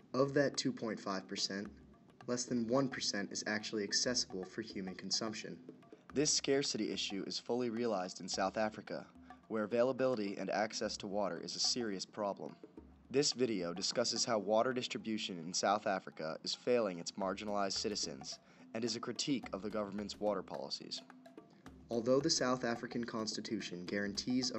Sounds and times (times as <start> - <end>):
Music: 0.0 - 24.5
Speech: 0.1 - 1.7, 2.3 - 5.6, 6.2 - 21.0, 21.9 - 24.5.